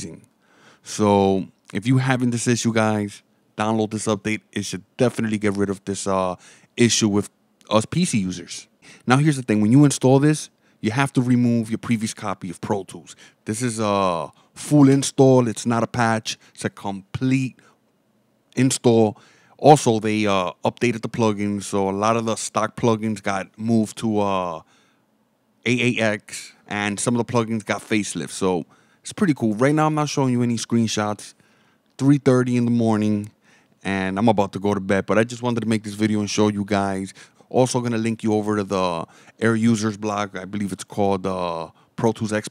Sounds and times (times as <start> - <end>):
Speech: 0.0 - 0.3, 0.9 - 17.6, 18.6 - 24.7, 25.6 - 31.4, 32.0 - 42.5.